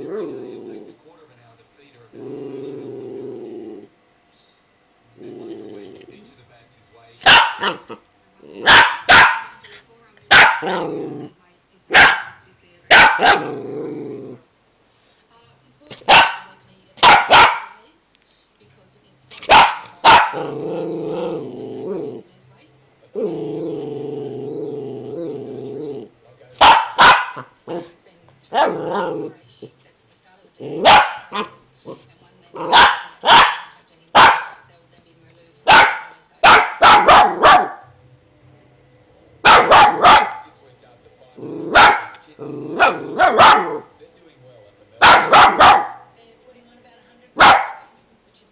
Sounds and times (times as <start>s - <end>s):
Growling: 0.0s - 1.1s, 2.1s - 4.0s, 5.2s - 6.4s, 7.6s - 11.4s, 13.0s - 14.5s, 19.5s - 22.3s, 23.1s - 26.2s, 26.8s - 29.8s, 30.6s - 34.6s, 41.3s - 44.0s
Speech: 0.1s - 3.3s, 5.2s - 8.7s, 9.4s - 23.6s, 27.6s - 37.5s, 39.9s - 48.5s
Bark: 7.2s - 8.0s, 8.6s - 9.6s, 10.3s - 10.9s, 11.9s - 13.6s, 16.1s - 17.8s, 19.4s - 20.5s, 26.6s - 27.5s, 28.5s - 28.9s, 30.8s - 31.6s, 32.6s - 34.6s, 35.7s - 37.9s, 39.4s - 40.6s, 41.7s - 42.2s, 42.8s - 43.9s, 45.0s - 46.1s, 47.4s - 48.0s.